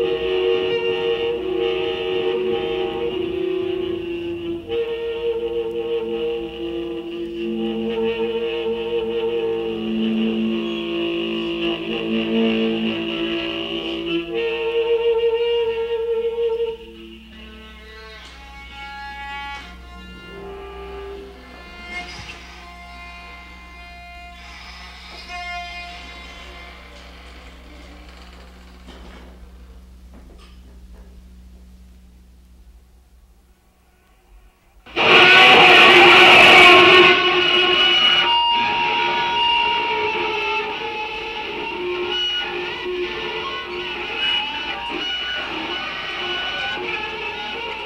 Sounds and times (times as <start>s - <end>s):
Bowed string instrument: 0.0s - 24.4s, 34.9s - 47.8s.